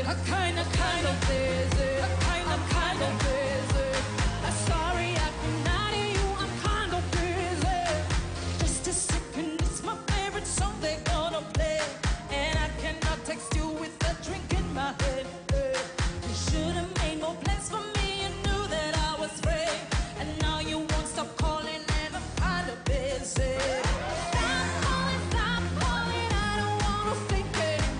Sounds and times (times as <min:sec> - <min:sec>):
Music: 0:00.0 - 0:27.9.